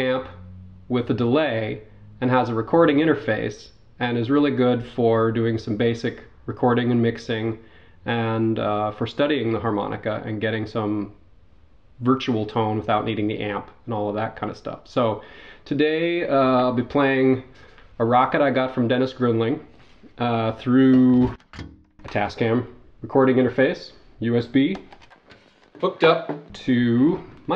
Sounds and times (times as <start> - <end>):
Speech: 0.0 - 11.2, 12.0 - 21.4, 22.1 - 24.9, 25.8 - 27.5.